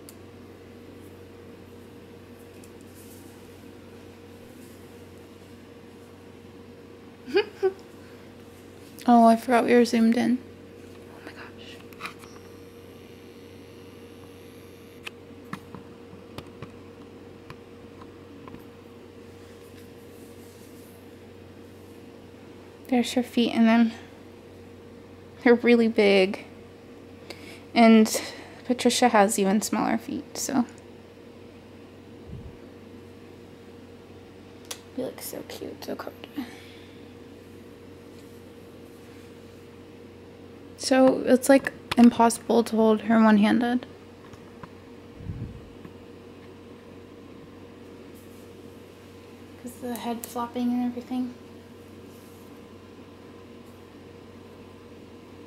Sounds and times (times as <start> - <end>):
Speech: 9.0 - 10.4, 22.9 - 24.0, 27.8 - 30.8, 35.0 - 36.5, 40.8 - 43.9, 49.6 - 51.4.